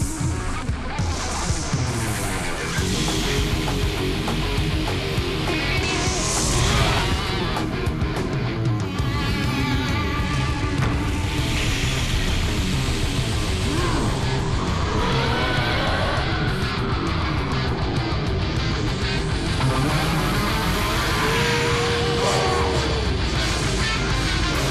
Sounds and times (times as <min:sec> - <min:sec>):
Electric guitar: 0:00.0 - 0:24.7.